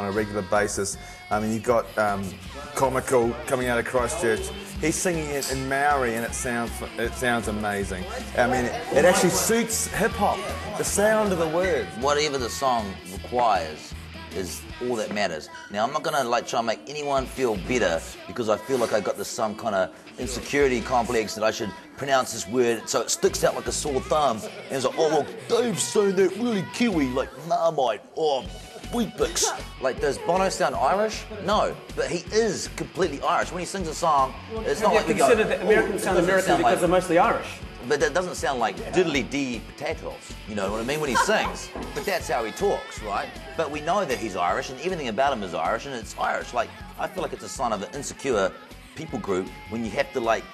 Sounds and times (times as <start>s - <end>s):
Music: 0.0s - 50.5s
Speech: 0.0s - 50.5s.